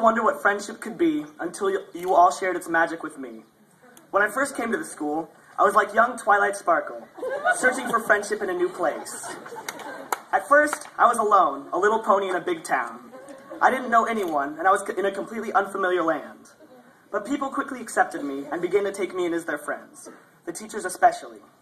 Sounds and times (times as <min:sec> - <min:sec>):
Male speech, man speaking: 0:00.0 - 0:03.5, 0:04.1 - 0:09.4, 0:10.3 - 0:21.5
Narration, monologue: 0:00.0 - 0:21.6.